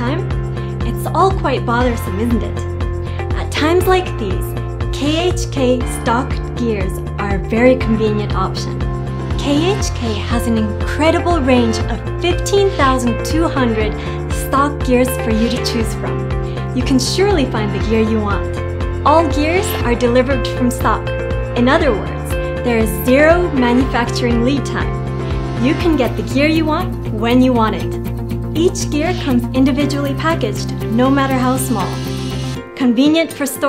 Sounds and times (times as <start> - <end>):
Speech: 0.0 - 0.2, 0.8 - 2.6, 3.4 - 8.8, 9.4 - 16.2, 16.8 - 18.5, 19.1 - 21.0, 21.6 - 25.0, 25.6 - 28.0, 28.6 - 32.1, 32.8 - 33.6
Music: 0.0 - 33.6.